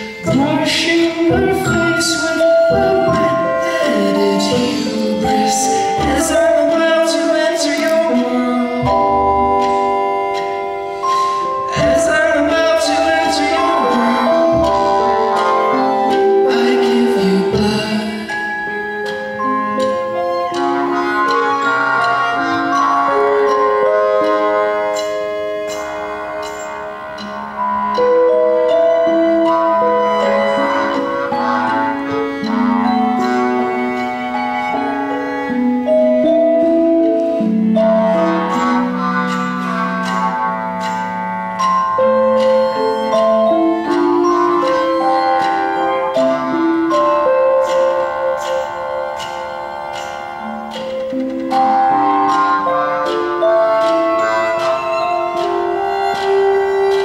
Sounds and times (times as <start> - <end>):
Music: 0.0 - 57.0.